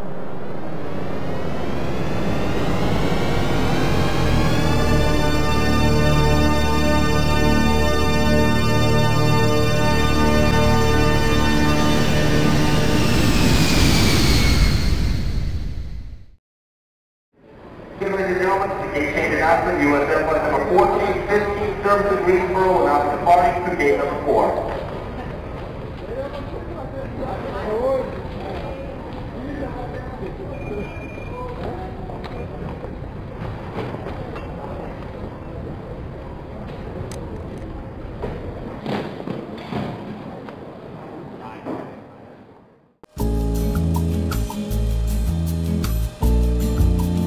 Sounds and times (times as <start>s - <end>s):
Speech: 18.0s - 25.4s, 26.0s - 32.5s, 41.4s - 42.4s.